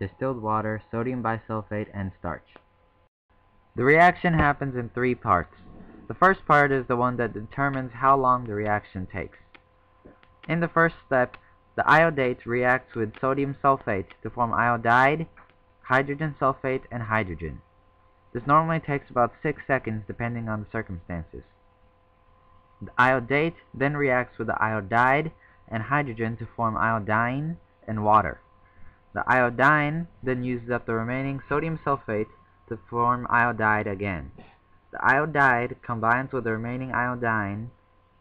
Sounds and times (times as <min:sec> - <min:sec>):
Speech: 0:00.0 - 0:02.6, 0:03.8 - 0:09.4, 0:10.5 - 0:17.6, 0:18.4 - 0:21.5, 0:22.8 - 0:28.4, 0:29.2 - 0:37.8.